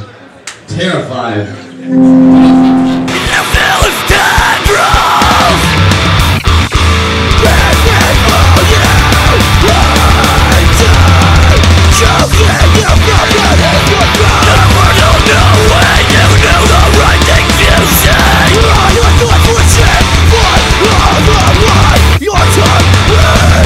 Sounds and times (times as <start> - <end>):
Angry music: 1.7 - 23.6.